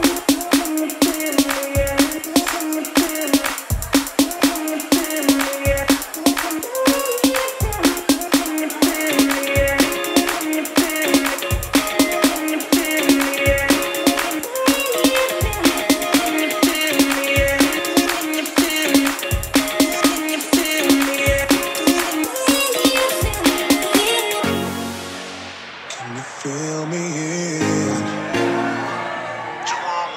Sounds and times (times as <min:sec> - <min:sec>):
Music: 0:00.0 - 0:29.9.